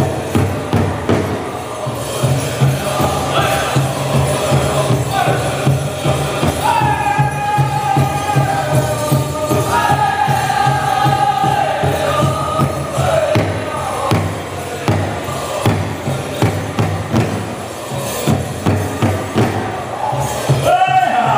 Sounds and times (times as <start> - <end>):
Music: 0.0 - 21.3.